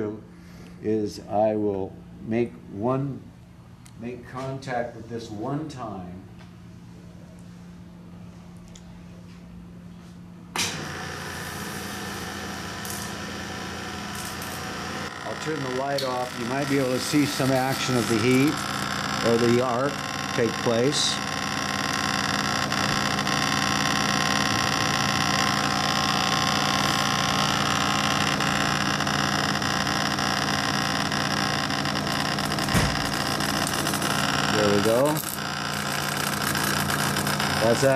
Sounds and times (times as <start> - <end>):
Speech: 0.0 - 3.3, 4.0 - 6.3, 15.2 - 18.6, 19.2 - 21.2, 34.5 - 35.2, 37.6 - 37.9.